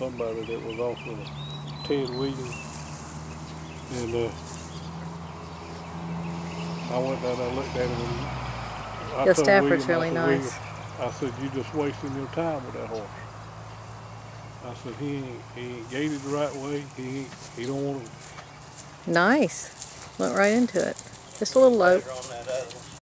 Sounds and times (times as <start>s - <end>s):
Speech: 0.0s - 1.3s, 1.9s - 2.6s, 3.9s - 4.4s, 6.9s - 8.3s, 9.0s - 13.2s, 14.6s - 18.1s, 19.1s - 22.8s
Clip-clop: 17.3s - 23.0s.